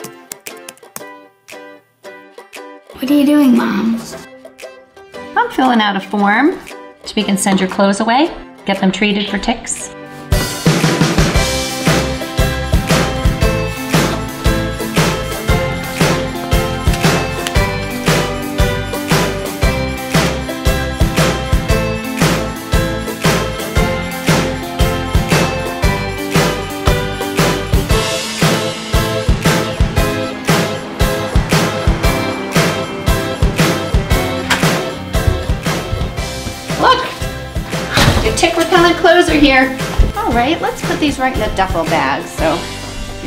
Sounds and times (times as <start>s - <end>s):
Music: 0.0s - 43.2s.